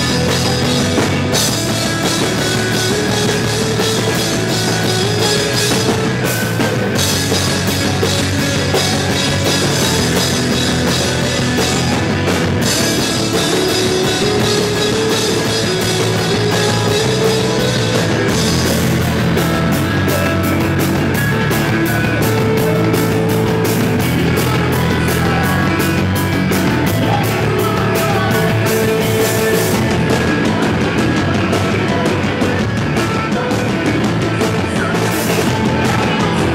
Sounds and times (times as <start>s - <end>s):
Music: 0.0s - 36.5s.